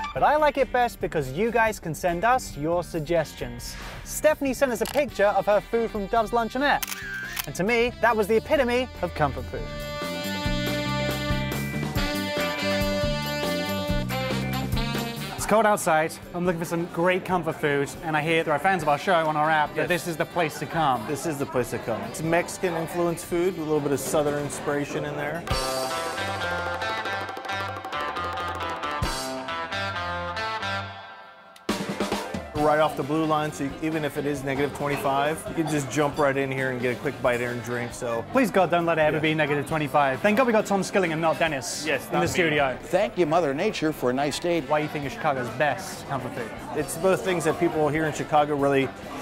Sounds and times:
Music: 0.0 - 49.2.

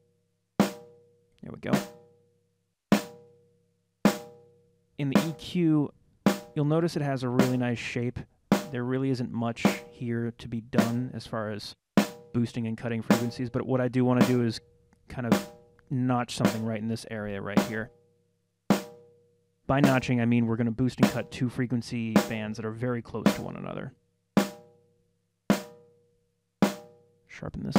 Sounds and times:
Music: 0.0 - 11.3, 12.0 - 27.7
Speech: 1.4 - 1.9, 5.0 - 5.9, 6.6 - 11.8, 12.4 - 17.9, 19.7 - 23.9, 27.3 - 27.7.

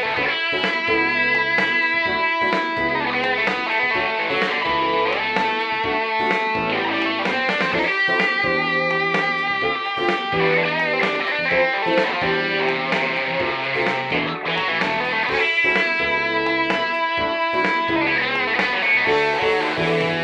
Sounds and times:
Guitar: 0.0 - 20.2.

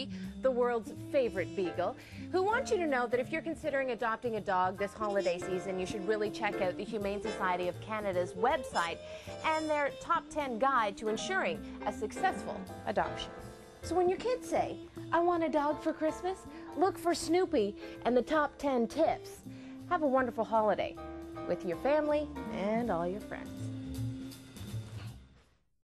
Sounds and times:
Music: 0.0 - 25.6
Speech: 0.5 - 13.3, 21.5 - 23.6.

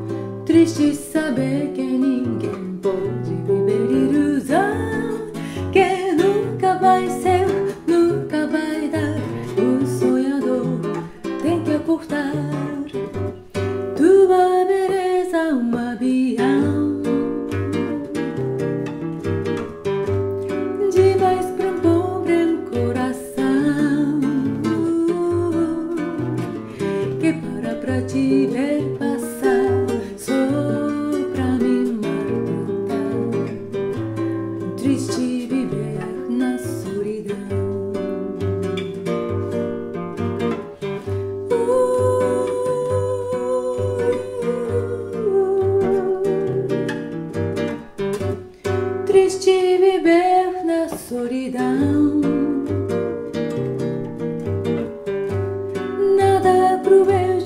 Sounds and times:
Acoustic guitar: 0.0 - 57.4
Singing: 41.5 - 46.7.

